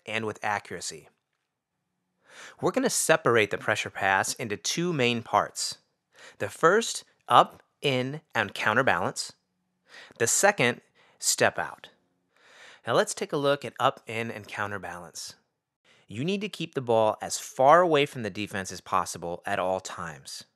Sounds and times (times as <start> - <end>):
Speech: 0.0 - 1.1, 2.5 - 5.8, 6.4 - 9.4, 10.1 - 11.9, 12.8 - 15.4, 16.1 - 20.5.